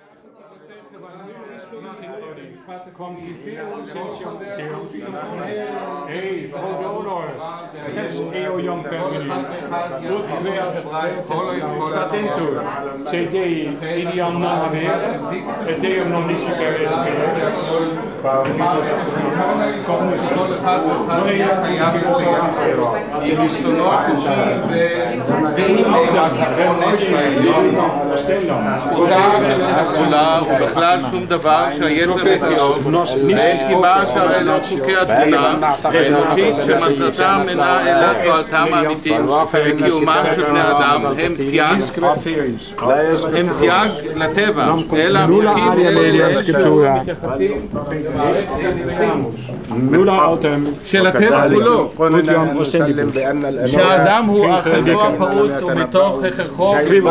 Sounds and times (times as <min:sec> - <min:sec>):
Speech: 0:00.0 - 0:57.1.